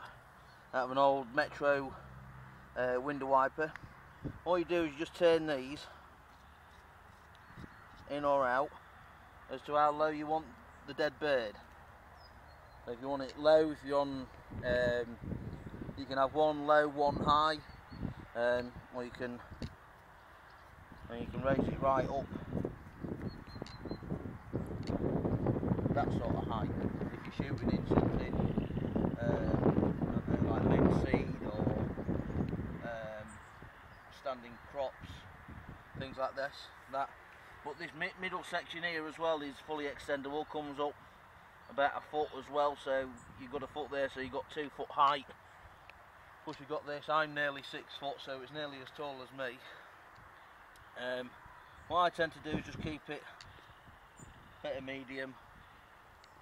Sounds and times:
Wind noise (microphone): 4.2s - 4.5s, 14.4s - 16.2s, 17.0s - 18.4s, 20.9s - 33.0s, 35.2s - 36.1s, 52.4s - 53.0s, 53.9s - 54.6s.

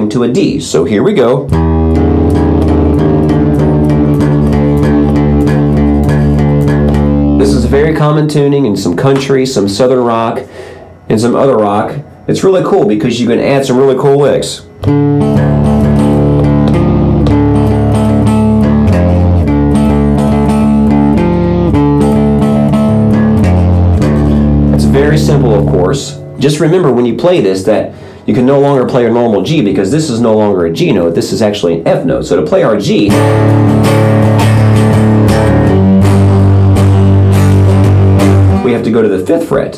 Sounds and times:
Speech: 0.0s - 1.5s, 7.4s - 10.5s, 11.1s - 14.7s, 24.7s - 33.2s, 38.6s - 39.7s
Guitar: 0.0s - 39.7s.

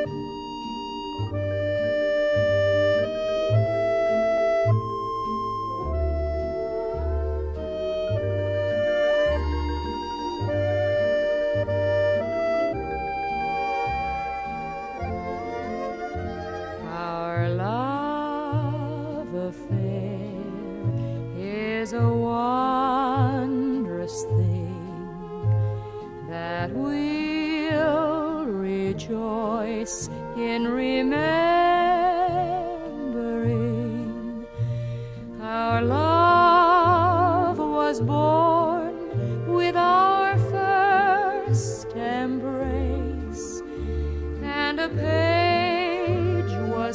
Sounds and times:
Music: 0.0s - 46.9s.

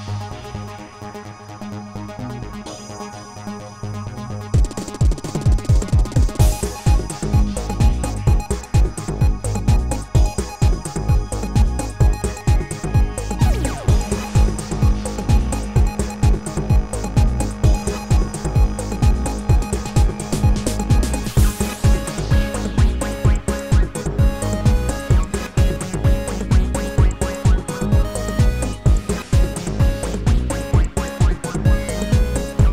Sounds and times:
Music: 0.0s - 32.7s.

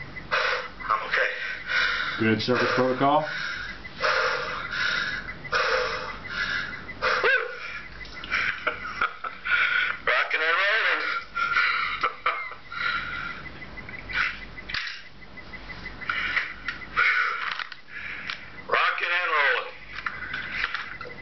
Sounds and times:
Breathing: 1.3s - 8.6s, 9.5s - 10.0s, 12.8s - 13.5s, 16.1s - 18.6s
Speech: 2.2s - 3.3s, 10.1s - 11.2s.

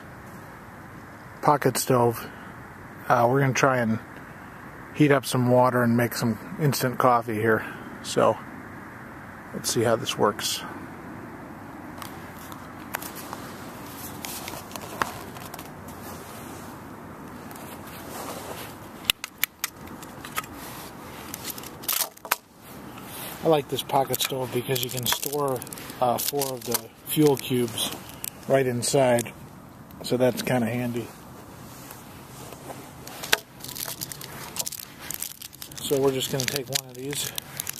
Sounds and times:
Outside, rural or natural: 0.0s - 37.7s
Speech: 1.4s - 2.4s, 3.0s - 4.1s, 5.0s - 8.4s, 9.6s - 10.8s, 23.4s - 29.4s, 30.0s - 31.1s, 35.8s - 37.4s.

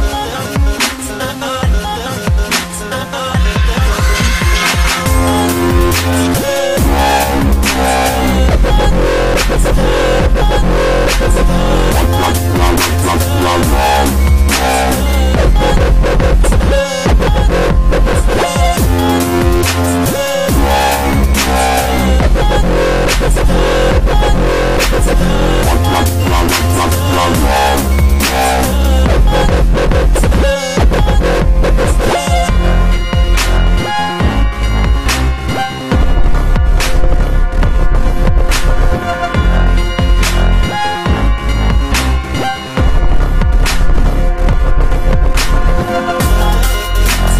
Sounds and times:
Dubstep: 0.0s - 47.3s.

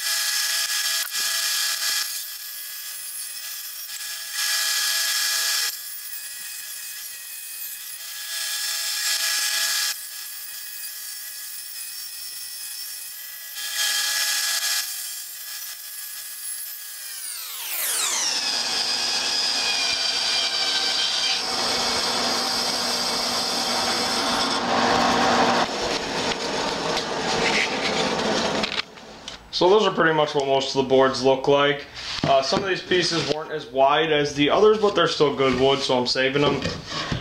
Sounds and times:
Wood: 17.4s - 29.4s, 34.8s - 37.2s.

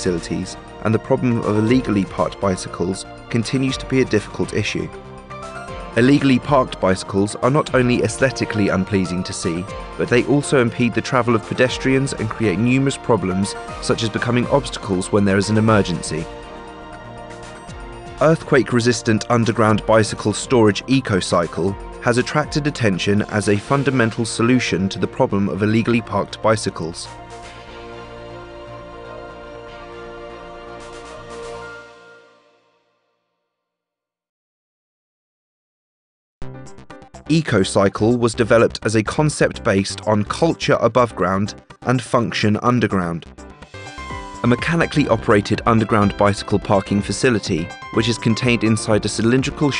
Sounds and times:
Speech: 0.0s - 4.9s, 6.0s - 16.3s, 18.2s - 27.1s, 37.3s - 43.2s, 44.4s - 49.7s
Music: 0.0s - 33.8s, 36.4s - 49.7s.

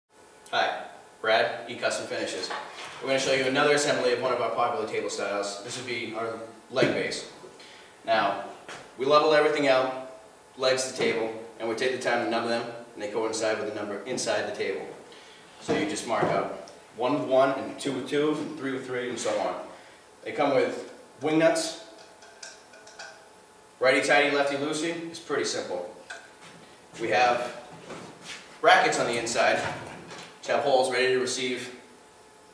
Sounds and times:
Speech: 0.5s - 7.4s, 8.0s - 15.0s, 15.6s - 21.9s, 23.8s - 26.0s, 27.0s - 27.6s, 28.6s - 29.8s, 30.4s - 31.8s.

